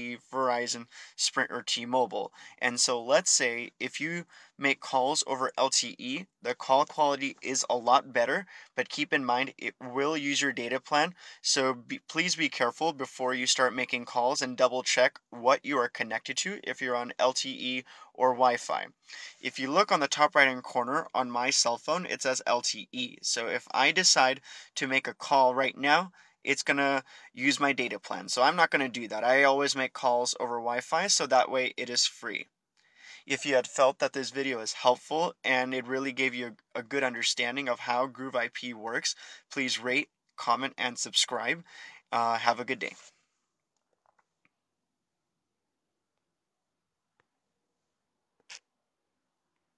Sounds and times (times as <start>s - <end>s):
Speech: 0.0s - 32.5s, 33.2s - 43.1s.